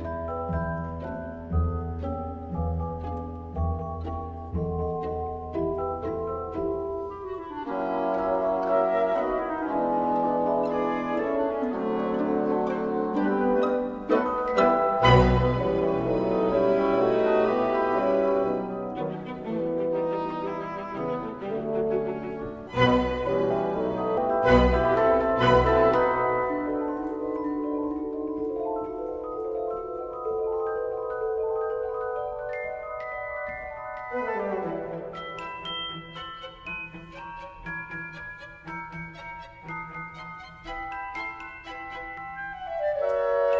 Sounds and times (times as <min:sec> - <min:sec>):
Music: 0:00.0 - 0:43.5.